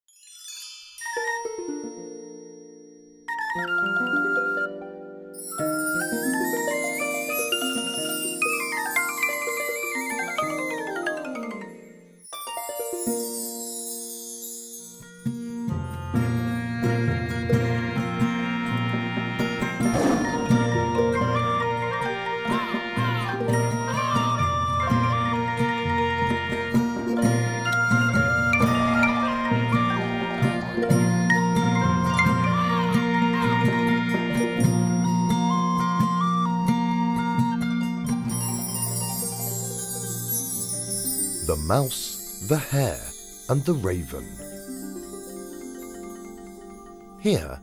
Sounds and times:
Music: 0.1 - 47.6.

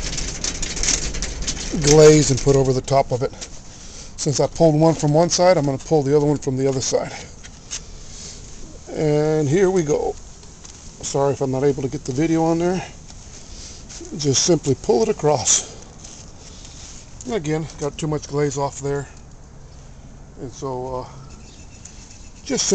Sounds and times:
Speech: 1.7 - 3.4, 4.2 - 7.3, 8.9 - 10.2, 11.0 - 13.0, 14.0 - 15.8, 17.2 - 19.2, 20.4 - 21.2, 22.5 - 22.7.

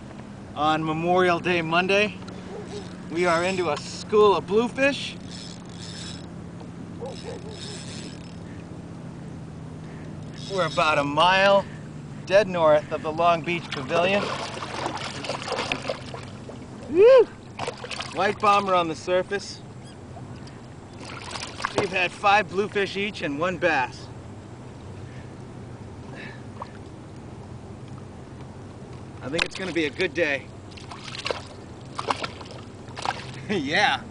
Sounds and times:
Speech: 10.5 - 11.6, 18.2 - 19.6, 21.8 - 24.1, 29.2 - 30.5, 33.5 - 34.1.

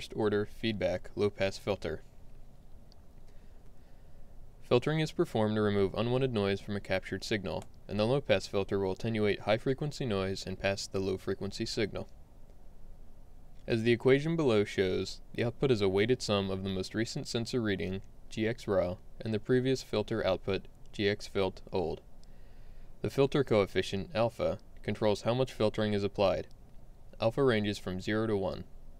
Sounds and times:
Speech: 0.0 - 2.1, 4.6 - 12.1, 13.7 - 22.1, 23.0 - 26.6, 27.2 - 28.7.

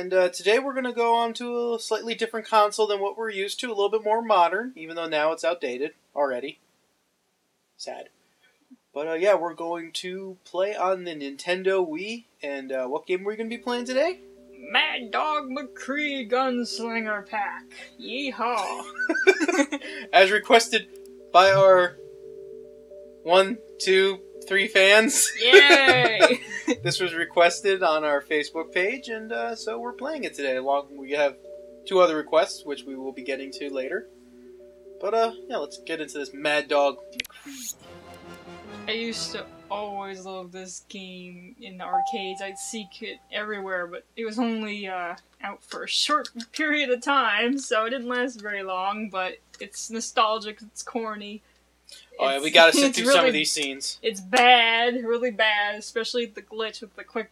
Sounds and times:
Speech: 0.0 - 6.6, 7.8 - 8.1, 8.9 - 20.8, 21.4 - 21.9, 23.3 - 34.0, 35.0 - 37.8, 38.9 - 51.4, 52.0 - 57.3.

